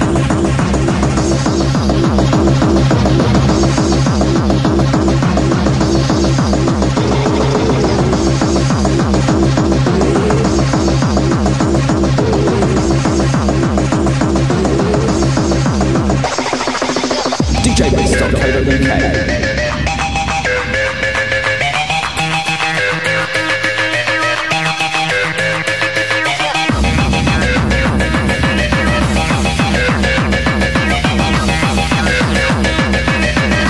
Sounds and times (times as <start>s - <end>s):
Techno: 0.0s - 24.6s.